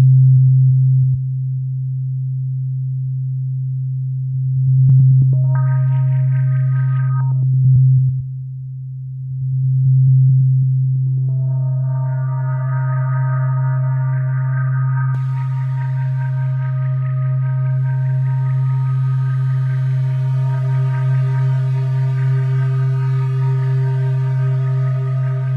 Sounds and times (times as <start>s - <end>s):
Electronic music: 5.4s - 7.4s, 11.2s - 25.5s.